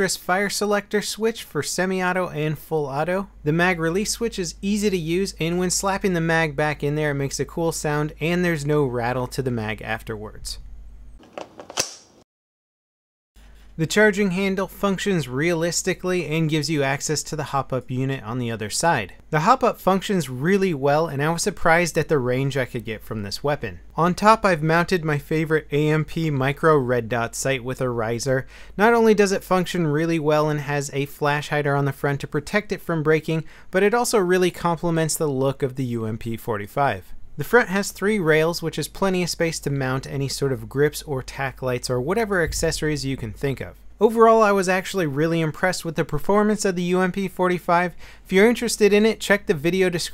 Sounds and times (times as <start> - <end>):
Speech: 0.0 - 10.6, 13.8 - 50.1
Inside, small room: 0.0 - 12.2, 13.4 - 50.1.